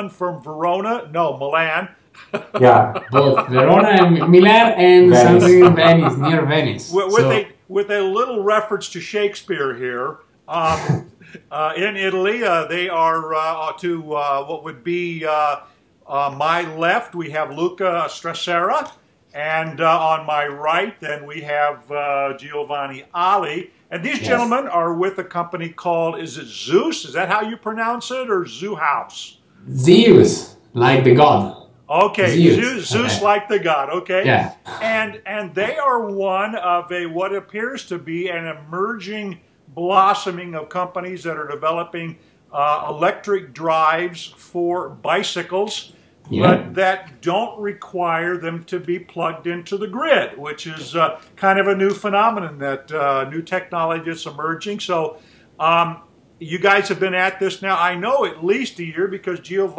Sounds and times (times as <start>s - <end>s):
Speech: 0.0s - 59.7s.